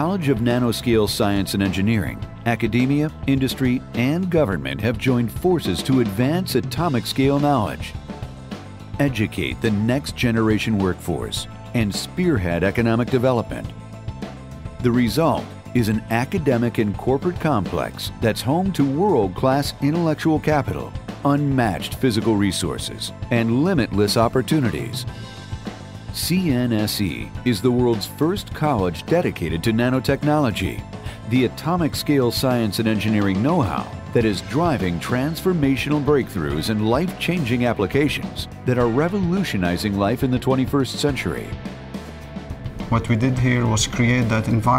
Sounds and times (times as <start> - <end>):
Speech: 0.0 - 7.9, 9.0 - 13.7, 14.8 - 25.1, 26.1 - 41.6, 42.9 - 44.7
Music: 0.0 - 44.7.